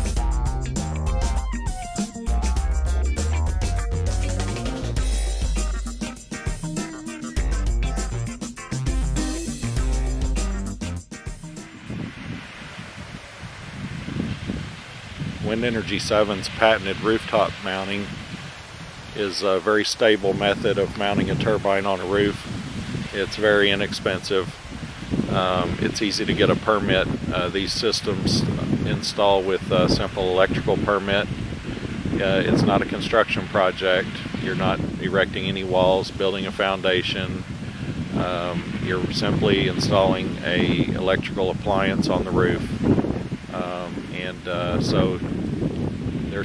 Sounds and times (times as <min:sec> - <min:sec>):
Music: 0:00.0 - 0:12.4
Speech: 0:15.4 - 0:18.1, 0:19.2 - 0:22.5, 0:23.1 - 0:24.6, 0:25.3 - 0:31.3, 0:32.2 - 0:37.4, 0:38.2 - 0:42.7, 0:43.5 - 0:45.2.